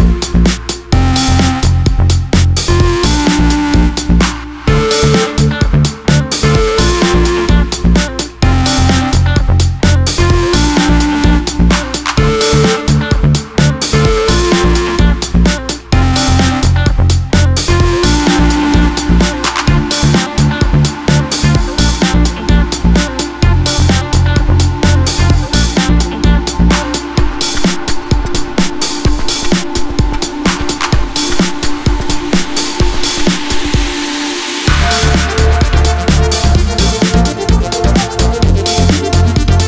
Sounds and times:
Music: 0:00.0 - 0:39.6.

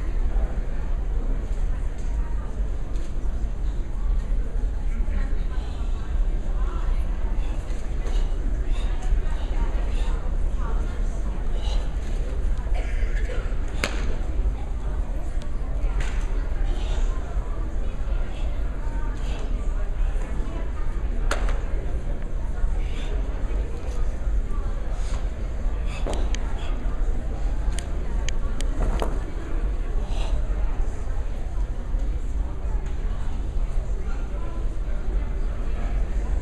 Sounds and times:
Speech: 0:00.0 - 0:36.4.

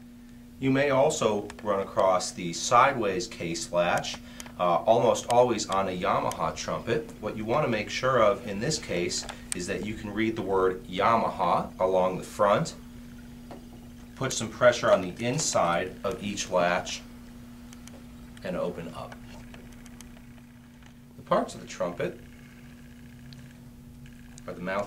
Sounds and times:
Speech: 0:00.6 - 0:12.8, 0:14.2 - 0:17.1, 0:18.4 - 0:19.2, 0:21.2 - 0:22.2, 0:24.5 - 0:24.8.

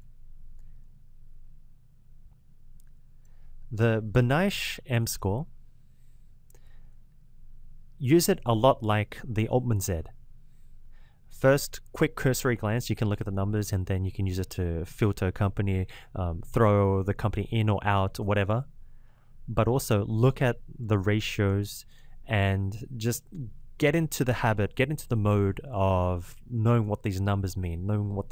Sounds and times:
Speech: 0:03.7 - 0:05.5, 0:08.0 - 0:10.1, 0:11.4 - 0:18.7, 0:19.5 - 0:28.3.

